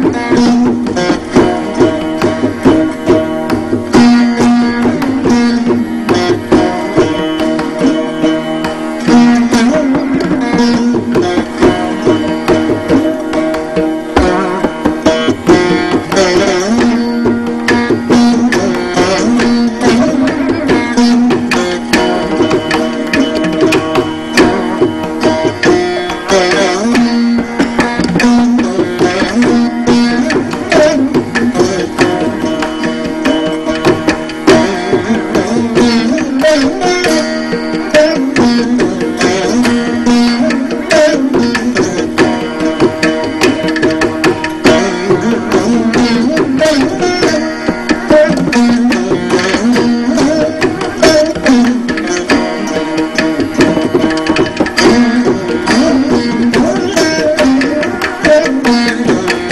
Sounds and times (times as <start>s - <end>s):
Tabla: 0.0s - 59.5s.